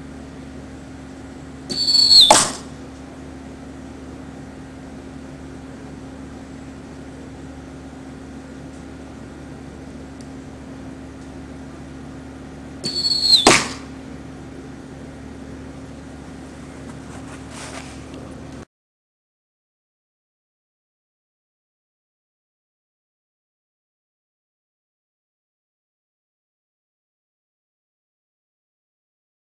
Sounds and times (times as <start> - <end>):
Arrow: 1.7 - 2.8, 12.8 - 13.9.